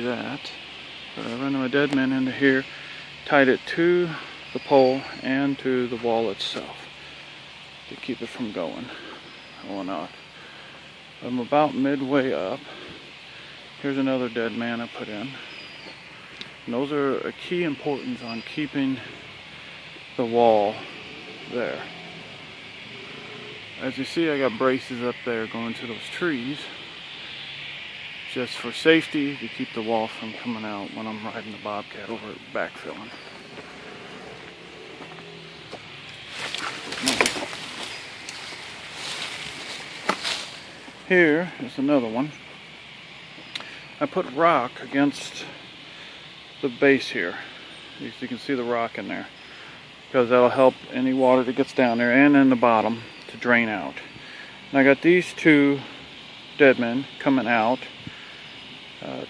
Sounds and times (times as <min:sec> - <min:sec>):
Speech: 0:00.0 - 0:00.6, 0:01.2 - 0:06.9, 0:07.9 - 0:10.2, 0:11.2 - 0:12.8, 0:13.8 - 0:15.5, 0:16.7 - 0:19.2, 0:20.2 - 0:22.0, 0:23.8 - 0:26.8, 0:28.3 - 0:33.2, 0:36.9 - 0:37.5, 0:41.1 - 0:42.4, 0:44.0 - 0:45.6, 0:46.6 - 0:49.4, 0:50.1 - 0:54.1, 0:54.7 - 0:56.0, 0:56.6 - 0:58.0, 0:59.0 - 0:59.3.